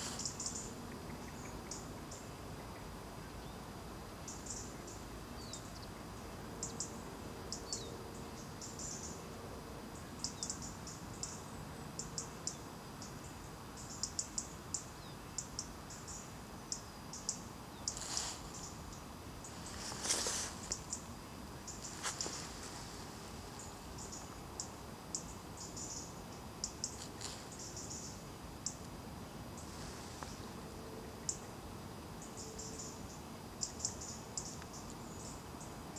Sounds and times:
Cricket: 0.0 - 35.9.

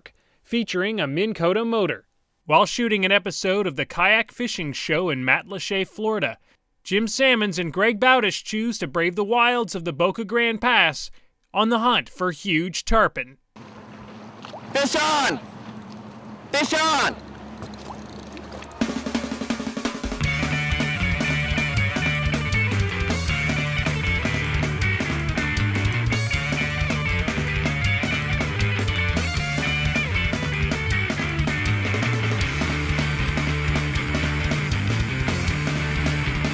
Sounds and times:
Music: 18.8 - 36.5.

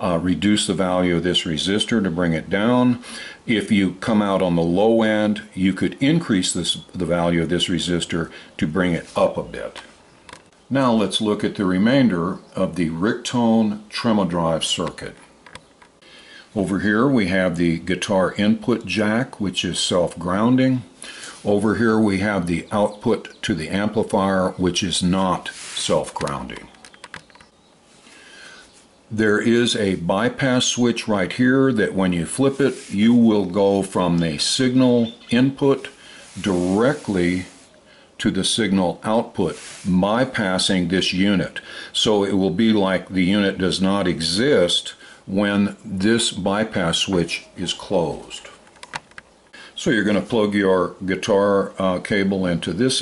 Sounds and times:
Speech: 0.0 - 10.0, 10.7 - 15.3, 16.5 - 26.8, 29.1 - 48.6, 49.7 - 53.0.

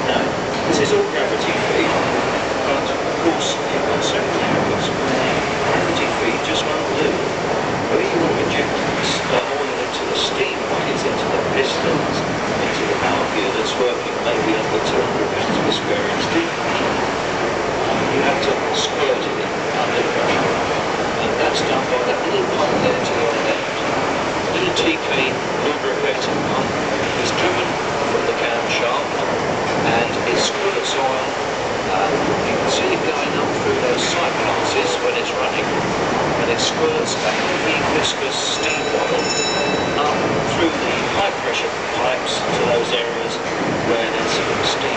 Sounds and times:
Speech: 0.0 - 7.3, 7.9 - 17.0, 17.8 - 44.9.

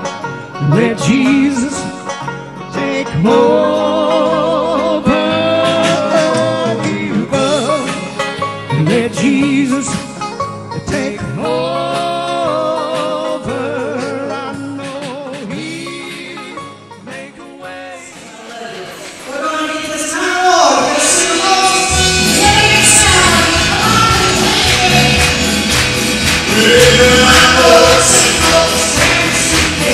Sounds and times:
Music: 0.0 - 29.9
Speech: 18.4 - 22.0
Female singing: 20.6 - 25.5, 26.5 - 29.9.

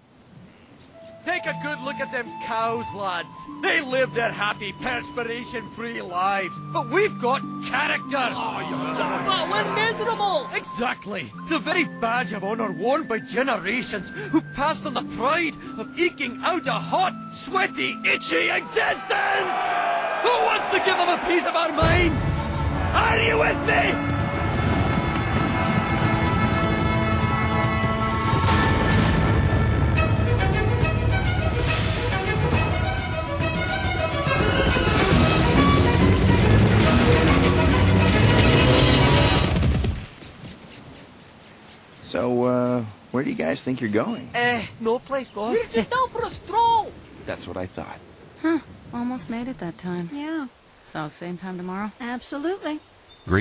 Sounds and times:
Music: 1.0 - 19.2, 21.7 - 39.9.

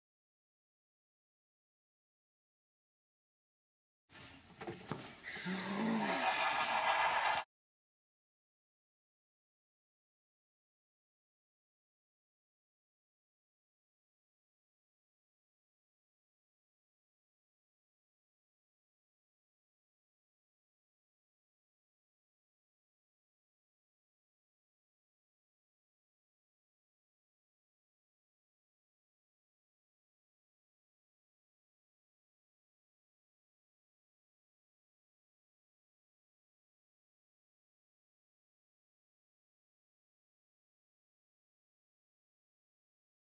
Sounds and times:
Bird: 4.2 - 7.4.

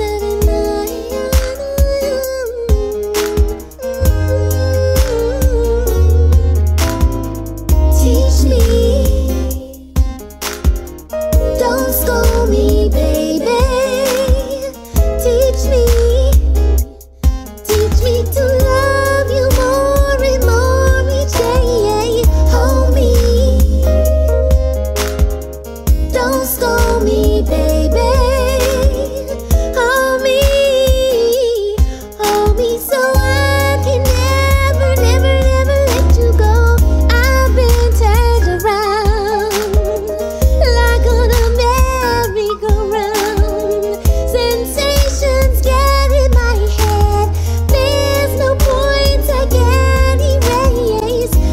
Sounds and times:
Music: 0.0 - 51.5.

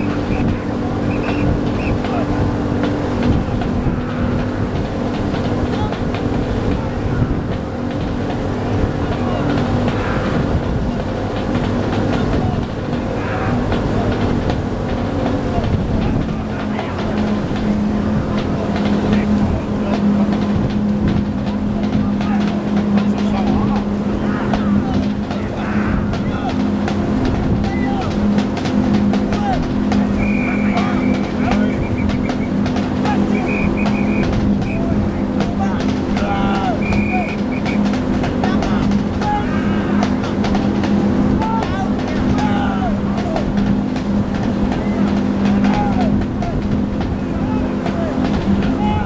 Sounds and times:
Speech: 0.0 - 4.6, 5.3 - 7.6, 8.5 - 49.0.

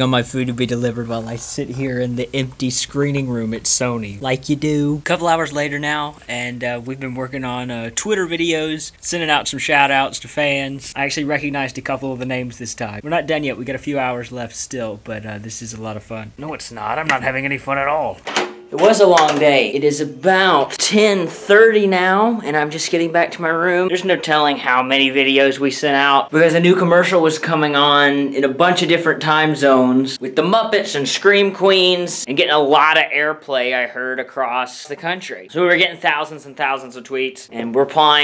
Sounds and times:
Speech: 0.0 - 18.2, 18.8 - 38.2
Inside, small room: 0.0 - 38.2.

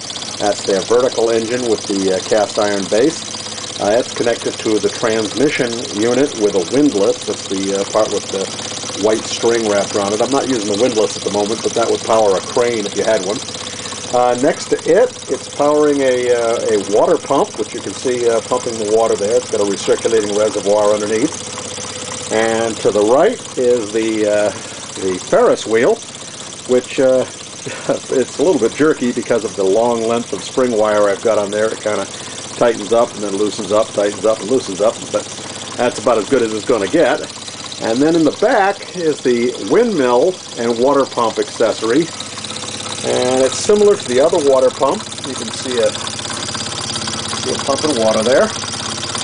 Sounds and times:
Engine: 0.0 - 49.2
Speech: 0.4 - 13.4, 14.1 - 21.3, 22.3 - 26.0, 26.7 - 27.3, 27.9 - 35.2, 35.8 - 42.1, 43.0 - 46.0, 47.4 - 48.6.

